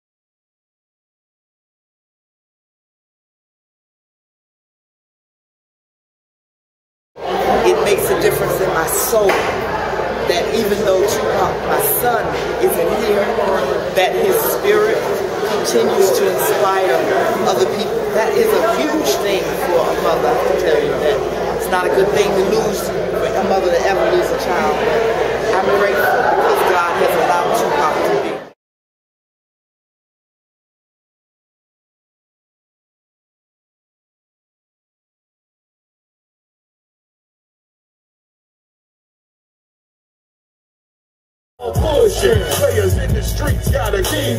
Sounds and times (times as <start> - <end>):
Inside, large room or hall: 7.2 - 28.6, 41.6 - 44.3
Speech: 7.2 - 28.6.